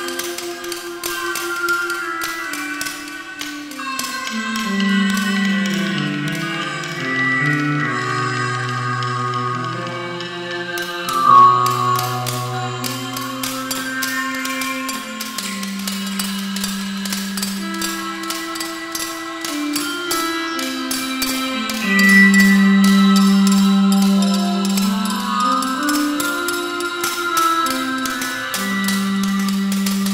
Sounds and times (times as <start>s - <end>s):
Music: 0.0s - 30.1s.